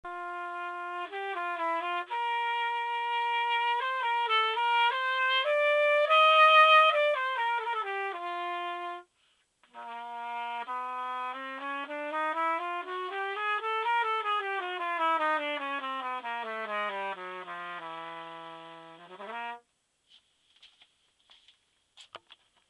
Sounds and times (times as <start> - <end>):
Wind instrument, woodwind instrument: 0.1 - 19.6.